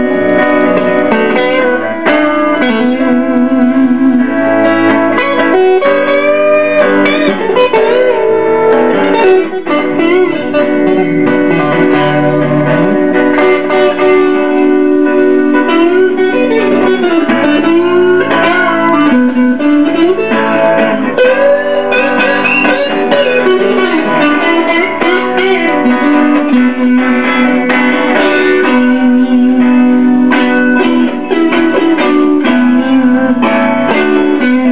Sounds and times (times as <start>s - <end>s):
Electric guitar: 0.0s - 34.7s
Strum: 0.0s - 34.7s.